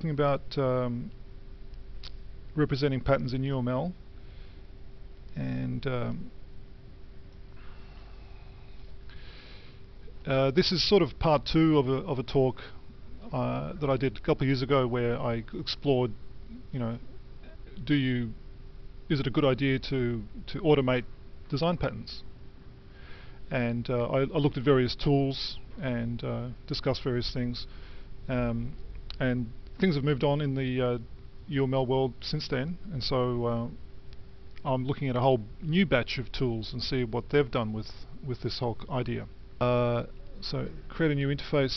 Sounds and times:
Speech: 0.0 - 1.2, 2.5 - 4.0, 5.3 - 6.3, 10.2 - 18.4, 19.1 - 22.3, 23.5 - 27.7, 28.3 - 33.8, 34.6 - 41.7.

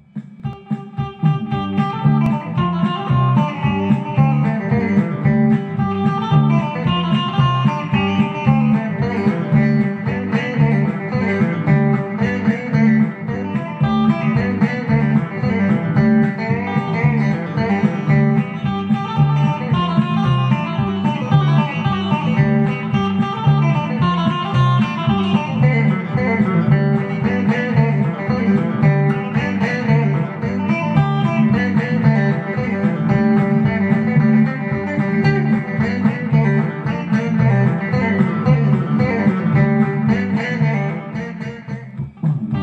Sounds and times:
Strum: 0.0 - 42.6.

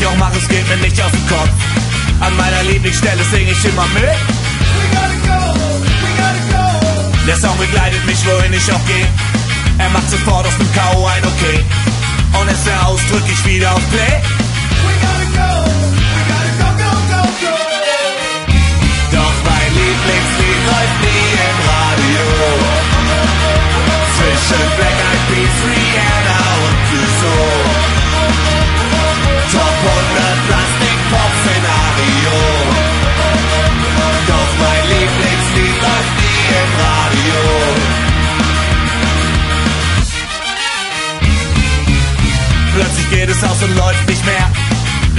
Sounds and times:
Music: 0.0 - 45.1.

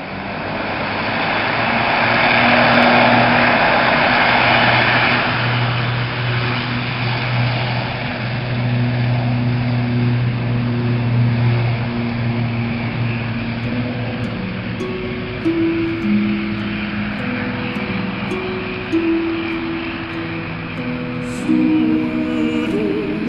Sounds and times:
Aircraft: 0.0 - 14.8
Music: 13.6 - 23.2.

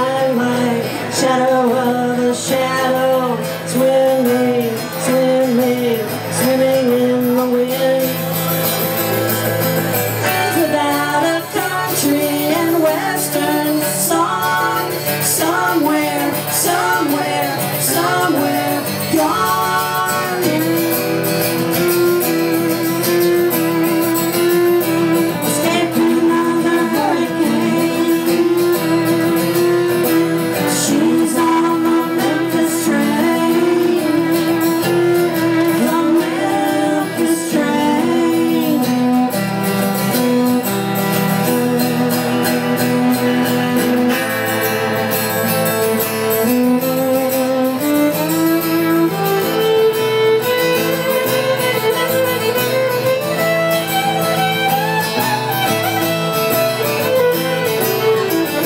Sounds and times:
Violin, fiddle: 0.0 - 58.6.

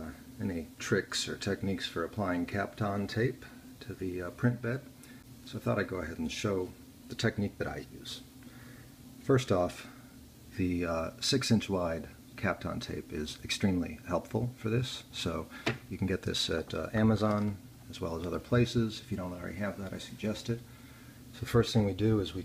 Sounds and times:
Speech: 0.0 - 4.9, 5.5 - 8.3, 9.2 - 20.7, 21.3 - 22.4.

